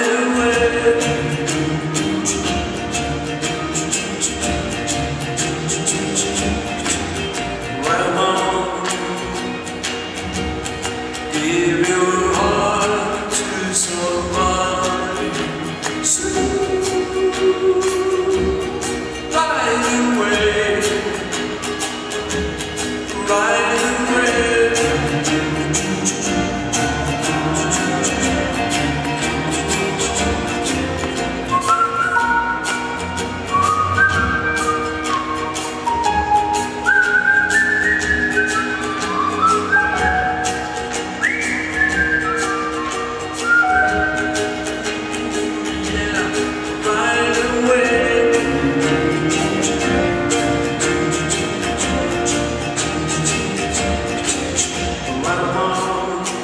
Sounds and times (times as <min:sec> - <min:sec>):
Music: 0:00.0 - 0:56.4.